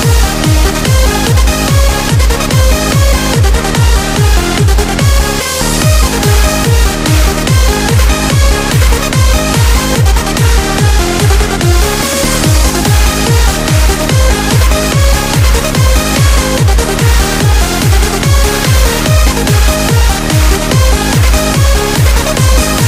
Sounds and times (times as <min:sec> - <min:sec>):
Dance music: 0:00.0 - 0:22.8.